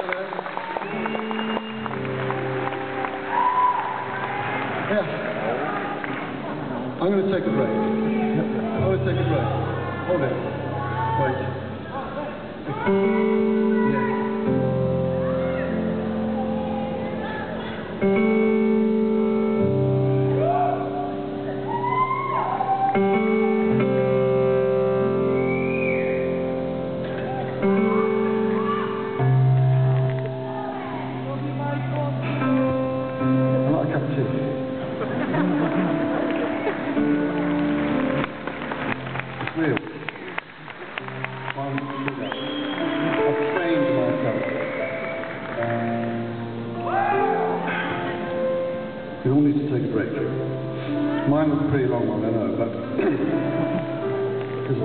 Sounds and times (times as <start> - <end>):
Music: 0.0 - 54.8.